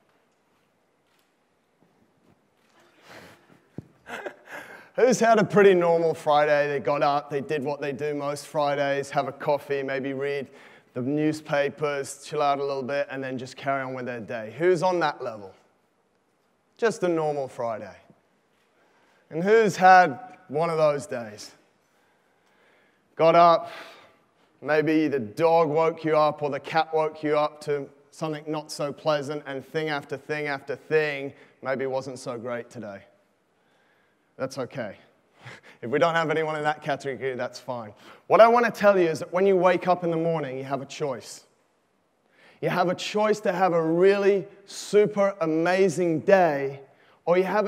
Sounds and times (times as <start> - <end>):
Speech: 5.0 - 15.6, 16.8 - 18.1, 19.3 - 21.6, 23.2 - 23.9, 24.6 - 33.2, 34.4 - 35.1, 35.8 - 41.5, 42.6 - 47.6.